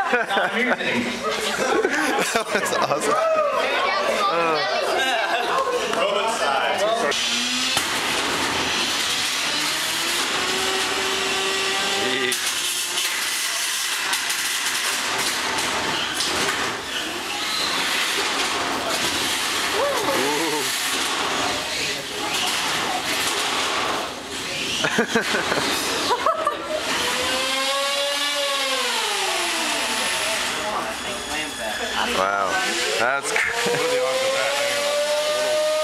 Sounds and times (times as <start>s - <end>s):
Inside, large room or hall: 0.0s - 35.8s
Blender: 7.1s - 21.2s, 26.7s - 30.8s, 32.2s - 35.8s.